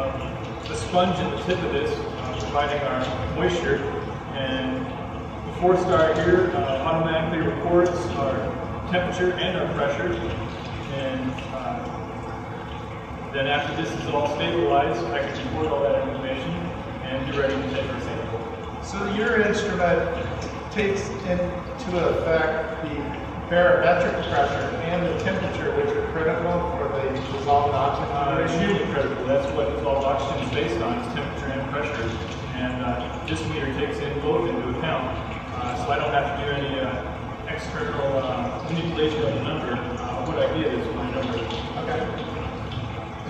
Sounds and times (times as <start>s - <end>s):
Speech: 0.0s - 12.0s, 13.3s - 42.4s.